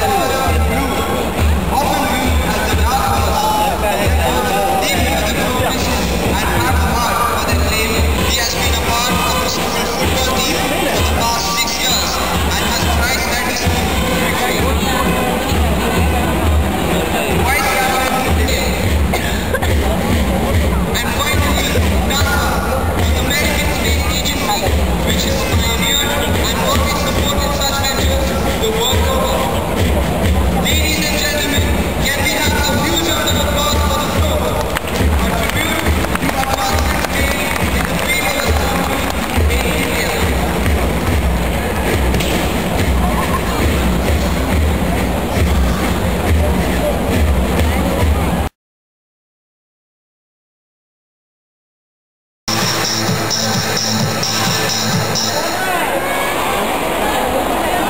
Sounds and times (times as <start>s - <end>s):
Music: 0.0s - 48.5s, 52.5s - 55.8s
Speech: 0.0s - 48.5s, 52.5s - 57.8s.